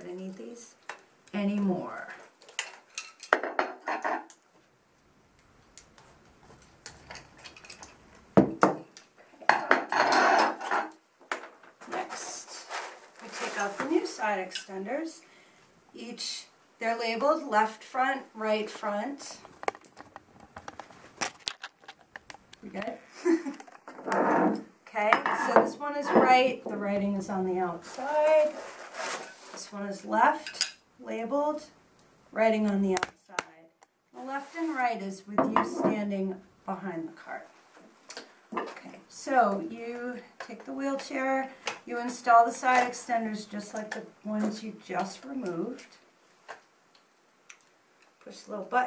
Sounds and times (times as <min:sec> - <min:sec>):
Speech: 0:00.0 - 0:02.2, 0:11.8 - 0:15.2, 0:16.0 - 0:19.4, 0:22.6 - 0:23.0, 0:24.9 - 0:28.6, 0:29.6 - 0:31.8, 0:32.4 - 0:37.5, 0:38.6 - 0:46.0, 0:48.2 - 0:48.8.